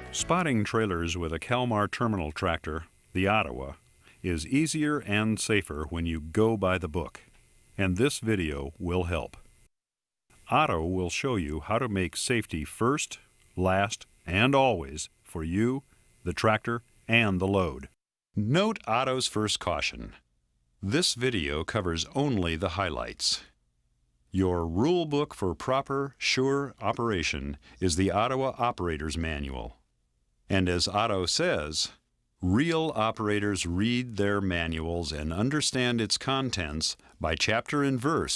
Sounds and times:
Speech: 0.2s - 9.4s, 10.4s - 20.2s, 20.8s - 23.6s, 24.3s - 29.8s, 30.5s - 38.3s.

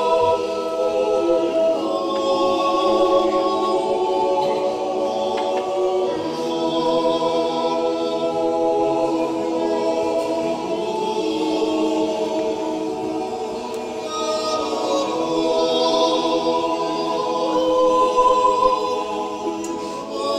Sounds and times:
A capella: 0.0s - 20.3s
Choir: 0.0s - 20.3s.

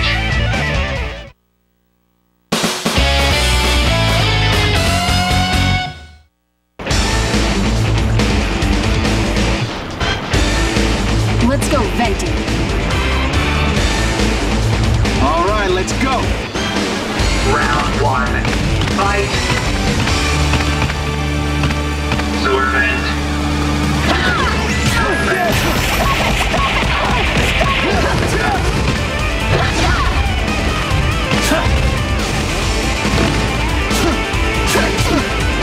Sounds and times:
Music: 0.0s - 1.4s, 2.5s - 35.6s.

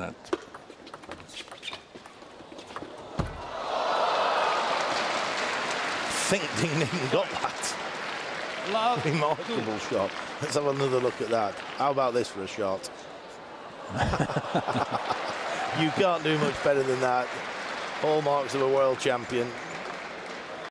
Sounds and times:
Speech: 8.7s - 12.9s, 15.7s - 17.3s, 18.0s - 19.6s.

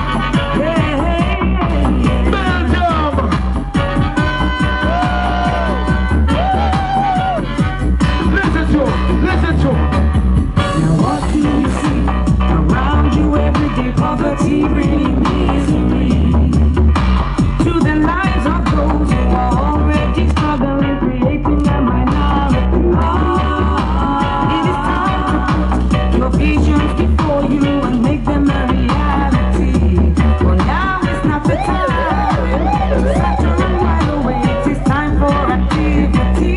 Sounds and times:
Music: 0.0s - 36.5s.

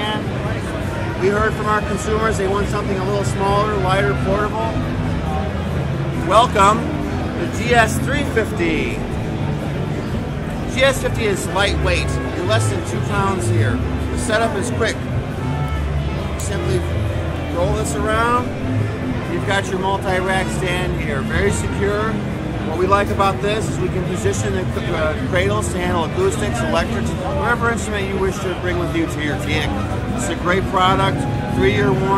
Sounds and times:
Speech: 0.0s - 4.8s, 6.2s - 9.0s, 10.7s - 15.0s, 16.2s - 16.9s, 17.5s - 18.5s, 19.3s - 32.1s
Tender music: 0.0s - 28.2s, 28.8s - 32.1s.

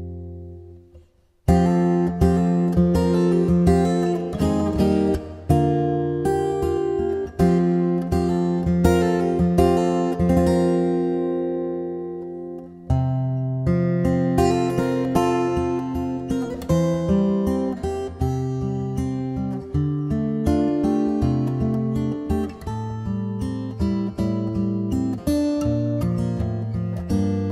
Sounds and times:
Acoustic guitar: 0.0s - 27.5s.

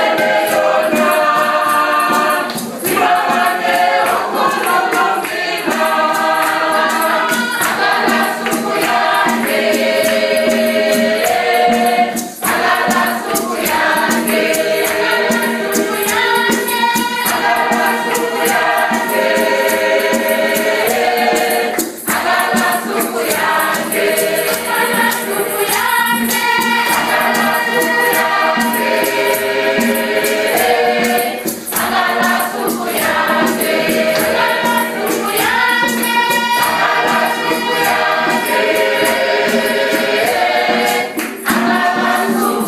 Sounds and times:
Choir: 0.0s - 42.6s.

